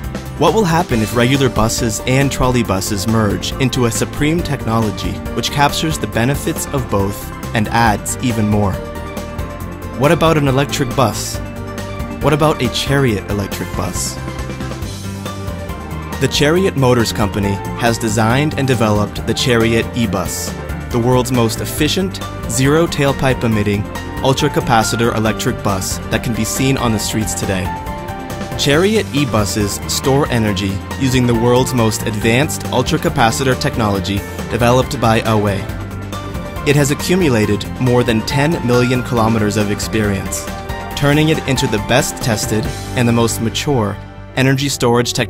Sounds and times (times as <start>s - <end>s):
Music: 0.0s - 45.3s
Speech: 0.4s - 8.8s, 10.0s - 11.4s, 12.2s - 14.2s, 16.2s - 27.8s, 28.6s - 35.7s, 36.6s - 45.3s.